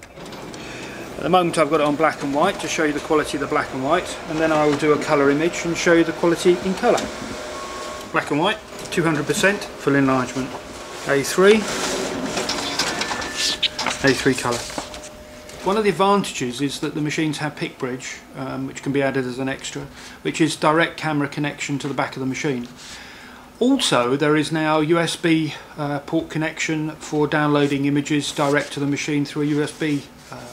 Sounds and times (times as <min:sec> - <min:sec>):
Printer: 0:00.0 - 0:23.0, 0:26.6 - 0:30.5
Speech: 0:01.2 - 0:07.1, 0:08.1 - 0:11.8, 0:14.0 - 0:14.7, 0:15.6 - 0:22.7, 0:23.6 - 0:30.5.